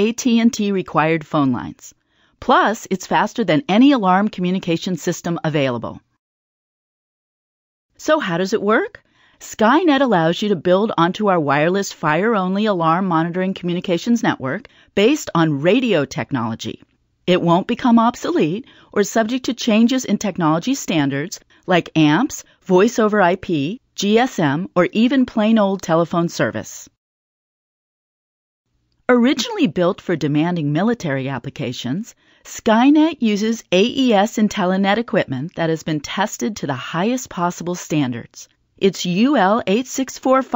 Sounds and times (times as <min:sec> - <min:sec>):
Speech: 0:00.0 - 0:06.1, 0:08.0 - 0:27.0, 0:29.1 - 0:40.5.